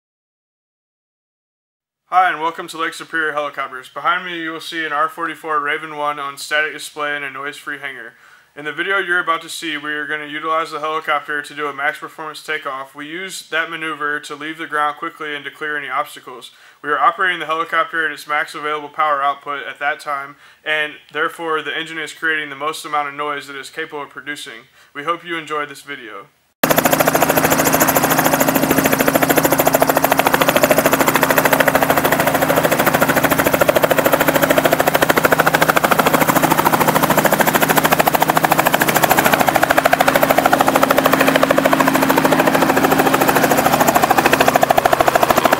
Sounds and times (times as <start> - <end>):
Helicopter: 26.6 - 45.5.